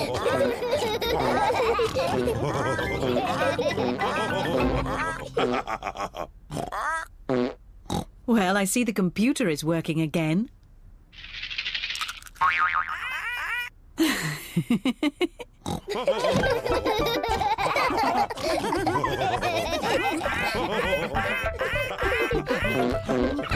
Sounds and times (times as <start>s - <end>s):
Music: 2.1s - 5.2s, 16.5s - 17.5s, 20.5s - 23.5s
Speech: 8.3s - 10.5s
Boing: 12.4s - 13.1s, 21.1s - 23.5s.